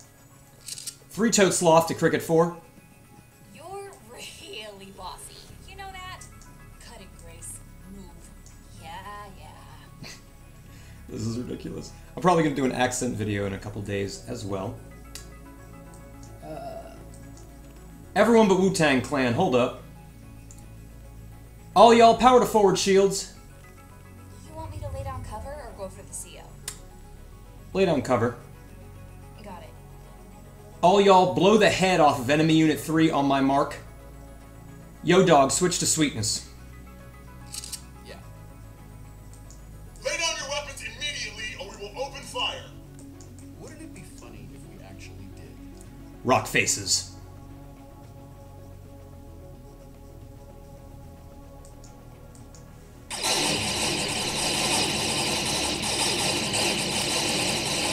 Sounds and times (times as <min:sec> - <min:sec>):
Music: 0:00.0 - 0:57.9.